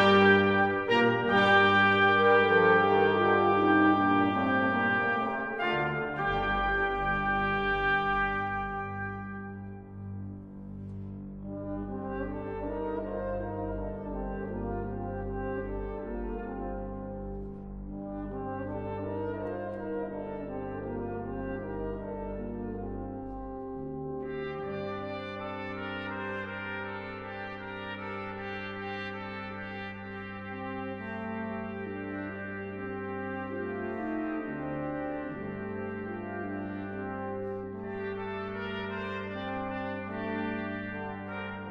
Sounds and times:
Brass instrument: 0.0s - 41.7s.

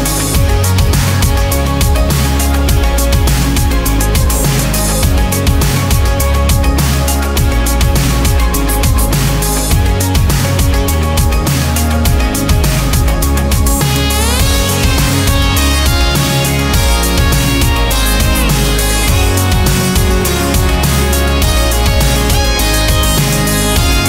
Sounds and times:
Music: 0.0s - 24.0s.

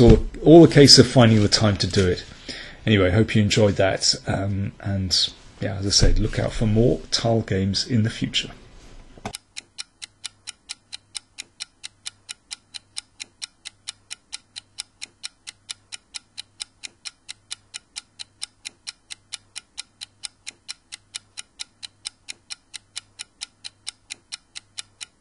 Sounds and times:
Speech: 0.0s - 8.6s
Inside, small room: 0.0s - 25.2s
Tick: 9.3s - 25.2s.

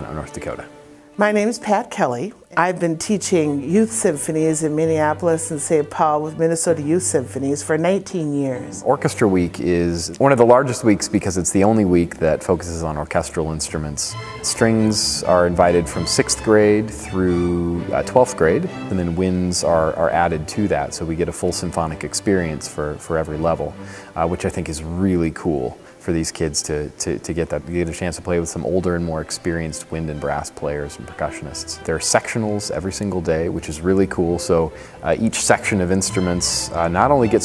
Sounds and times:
Orchestra: 0.0s - 37.4s
Speech: 0.0s - 37.4s.

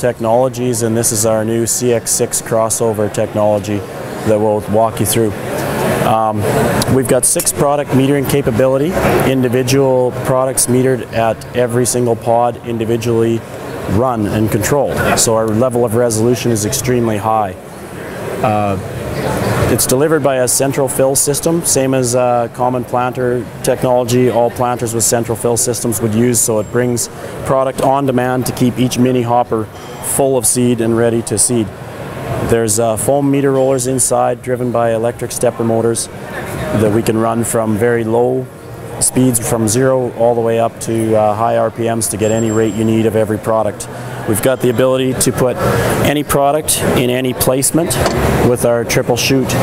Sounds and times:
Speech: 0.0s - 5.4s, 6.0s - 17.6s, 18.4s - 31.7s, 32.4s - 49.6s.

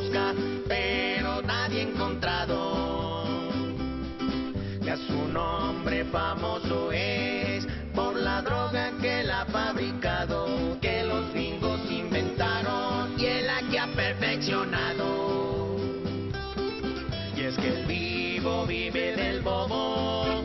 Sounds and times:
Music: 0.0s - 20.4s.

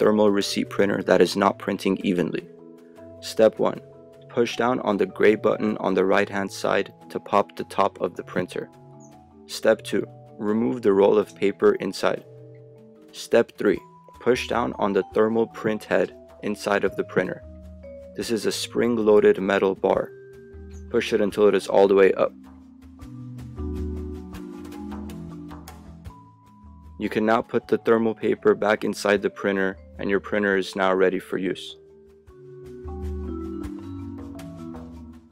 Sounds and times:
Speech: 0.0s - 2.5s, 3.2s - 8.7s, 9.5s - 12.2s, 13.1s - 17.4s, 18.2s - 20.1s, 20.9s - 22.4s, 27.0s - 31.8s
Music: 0.0s - 35.3s.

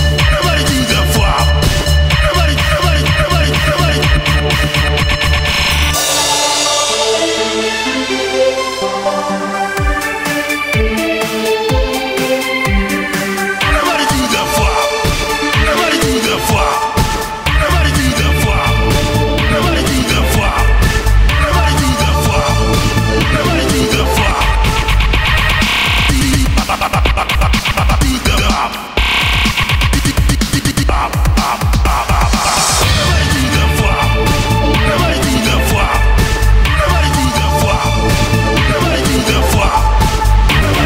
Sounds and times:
Techno: 0.0s - 40.8s.

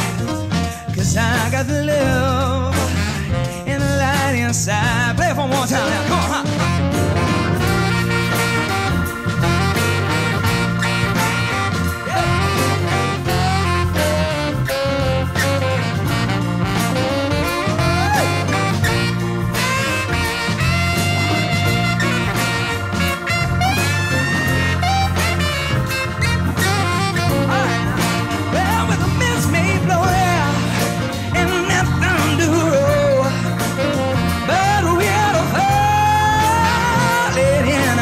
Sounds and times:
Swing music: 0.0s - 38.0s.

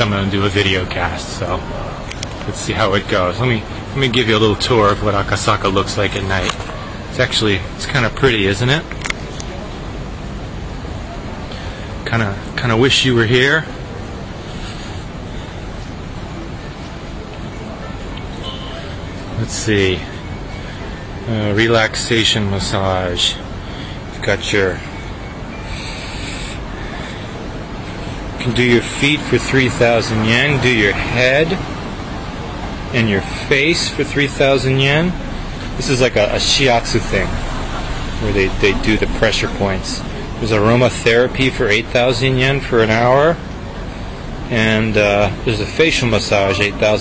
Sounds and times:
Speech: 0.0s - 9.8s, 12.0s - 13.8s, 17.2s - 20.2s, 21.2s - 23.5s, 24.1s - 24.9s, 28.4s - 31.7s, 32.9s - 43.4s, 44.5s - 47.0s
Hubbub, speech noise, speech babble: 0.0s - 47.0s.

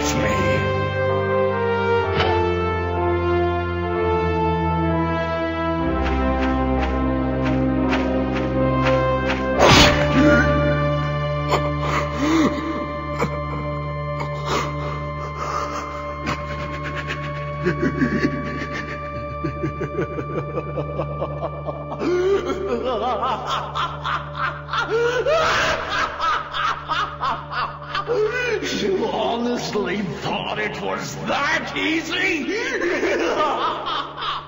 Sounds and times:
Music: 0.0s - 34.4s.

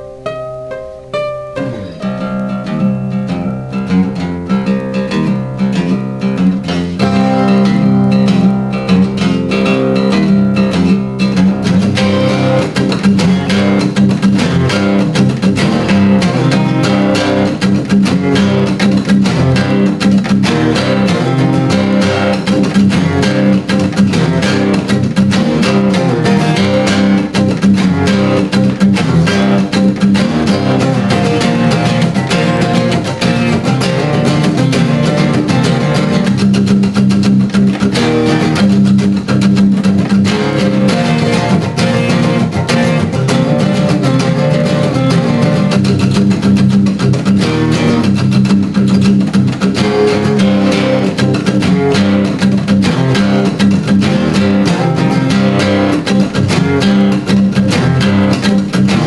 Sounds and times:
Acoustic guitar: 0.0s - 59.0s
Strum: 0.0s - 59.0s.

